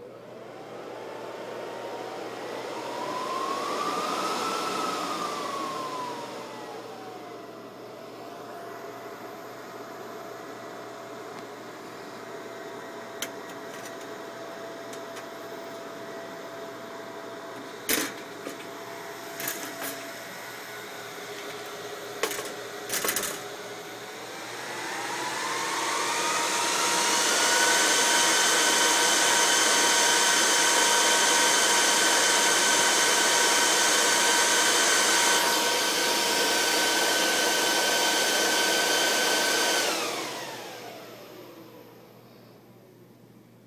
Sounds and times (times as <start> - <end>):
Vacuum cleaner: 0.0 - 43.0.